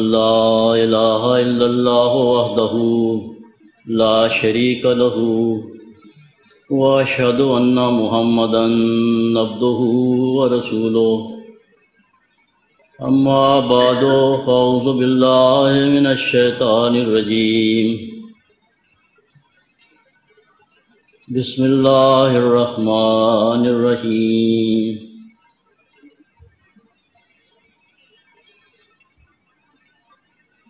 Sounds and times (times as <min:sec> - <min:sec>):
Male speech, man speaking: 0:06.7 - 0:11.4, 0:13.0 - 0:15.2, 0:21.3 - 0:25.0.